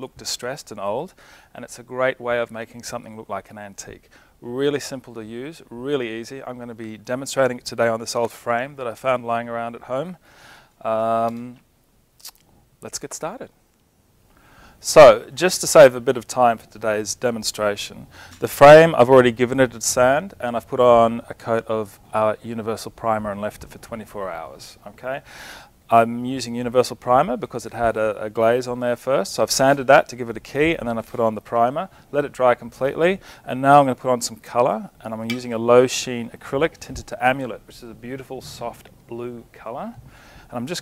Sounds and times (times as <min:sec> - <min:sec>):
Speech: 0:00.0 - 0:10.2, 0:10.8 - 0:11.6, 0:12.2 - 0:13.5, 0:14.8 - 0:25.2, 0:25.9 - 0:40.8.